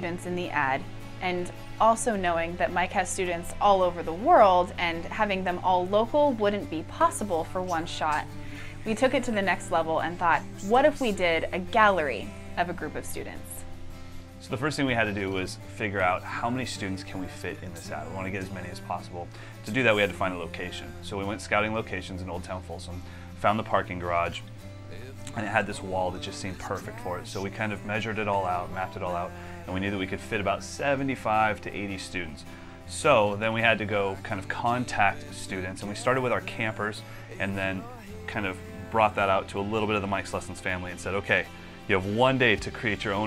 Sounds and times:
Speech: 0:00.0 - 0:08.3, 0:08.9 - 0:13.6, 0:14.4 - 0:24.4, 0:25.3 - 0:43.2
Music: 0:00.0 - 0:43.2.

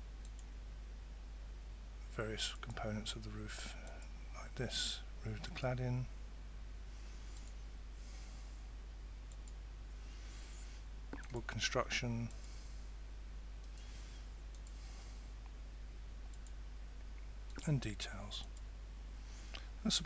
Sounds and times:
Speech: 0:02.1 - 0:06.1, 0:11.2 - 0:12.3, 0:17.6 - 0:18.5, 0:19.8 - 0:20.0.

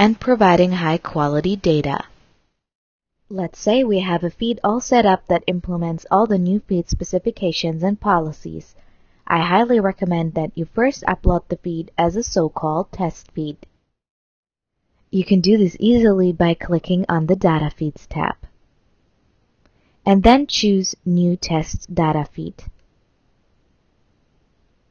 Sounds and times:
Speech: 0:00.0 - 0:02.1, 0:03.3 - 0:08.7, 0:09.3 - 0:13.7, 0:15.2 - 0:18.5, 0:20.1 - 0:22.7.

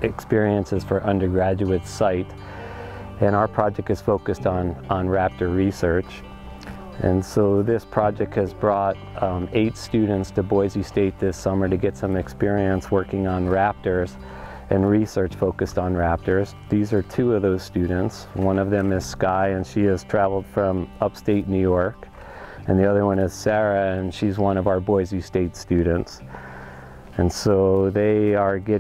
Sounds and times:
Speech: 0:00.0 - 0:02.3, 0:03.2 - 0:06.2, 0:07.0 - 0:22.0, 0:22.7 - 0:26.2, 0:27.2 - 0:28.8
Music: 0:00.0 - 0:28.8.

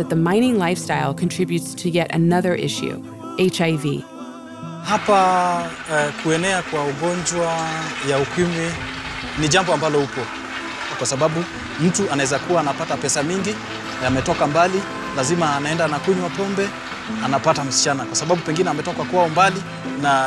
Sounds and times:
Speech: 0:00.0 - 0:04.0, 0:04.9 - 0:08.8, 0:09.4 - 0:10.3, 0:11.0 - 0:20.2
Music: 0:00.0 - 0:20.2.

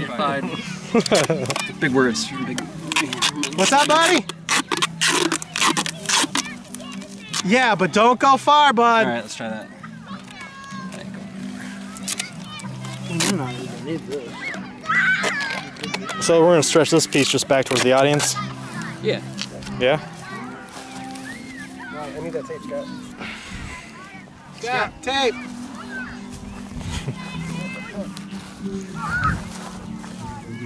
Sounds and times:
Music: 0:00.0 - 0:30.6
Outside, rural or natural: 0:00.0 - 0:30.6.

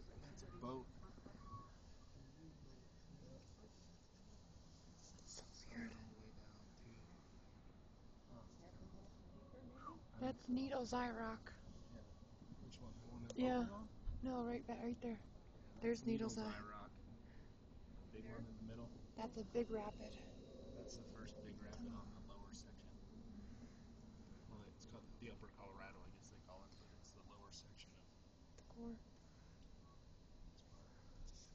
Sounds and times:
Speech: 0:12.7 - 0:15.2, 0:15.8 - 0:16.9, 0:18.2 - 0:20.3, 0:20.9 - 0:23.0, 0:24.5 - 0:28.0.

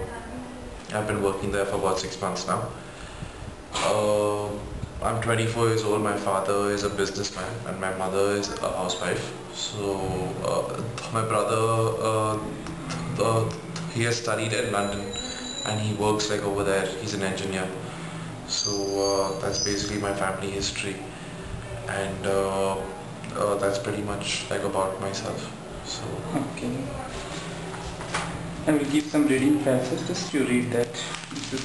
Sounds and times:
Narration, monologue: 0:00.7 - 0:27.4
Male speech, man speaking: 0:00.9 - 0:02.8, 0:03.8 - 0:17.8, 0:18.5 - 0:21.1, 0:21.9 - 0:26.8, 0:28.6 - 0:31.6.

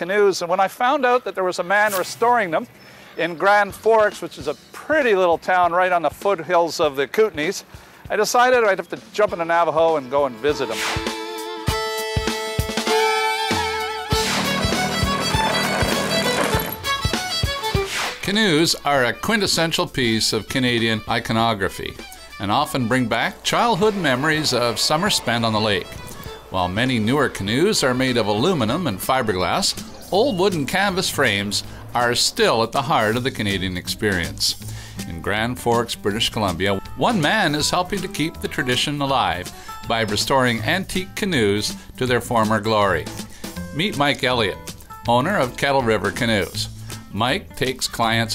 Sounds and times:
Speech: 0:00.0 - 0:10.8, 0:18.2 - 0:43.1, 0:43.7 - 0:48.3
Music: 0:03.6 - 0:48.3.

